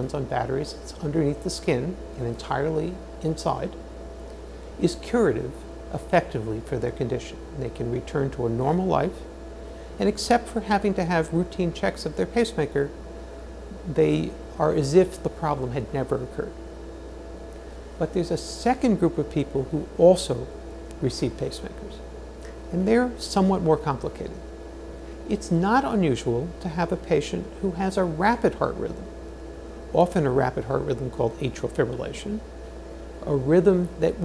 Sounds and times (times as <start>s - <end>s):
Speech: 0.0s - 3.8s, 4.8s - 9.3s, 10.0s - 13.0s, 13.7s - 16.6s, 18.0s - 22.1s, 22.7s - 24.4s, 25.3s - 29.1s, 29.9s - 32.5s, 33.2s - 34.2s.